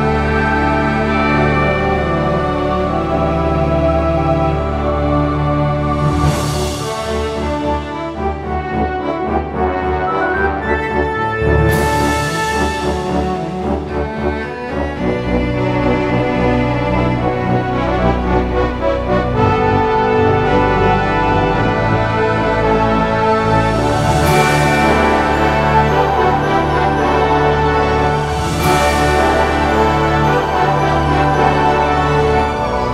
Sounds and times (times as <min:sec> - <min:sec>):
Soul music: 0:00.0 - 0:32.9.